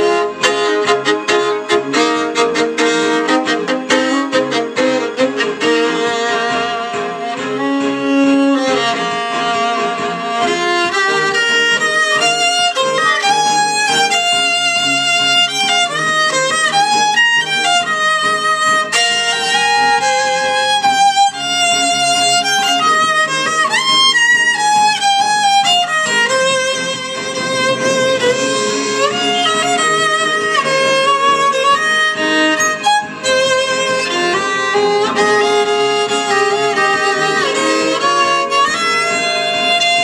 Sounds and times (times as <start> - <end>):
Violin, fiddle: 0.0 - 40.0.